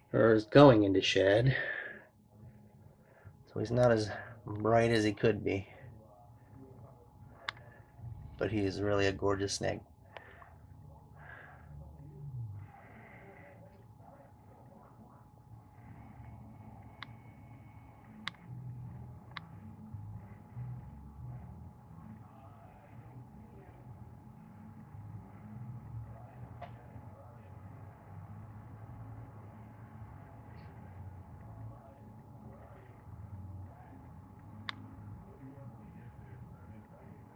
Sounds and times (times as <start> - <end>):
Speech: 0.0 - 2.0, 3.5 - 7.8, 8.4 - 9.9.